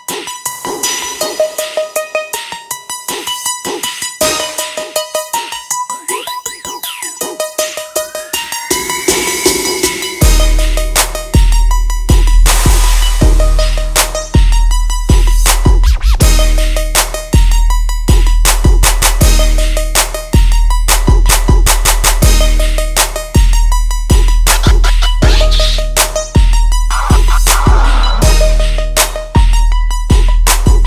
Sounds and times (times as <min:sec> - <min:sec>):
Music: 0:00.0 - 0:30.8.